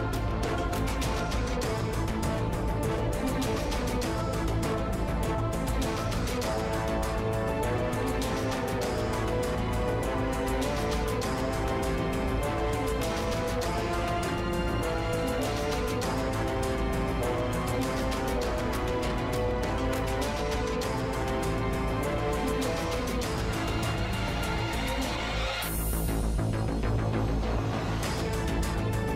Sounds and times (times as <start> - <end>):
Music: 0.0 - 29.1.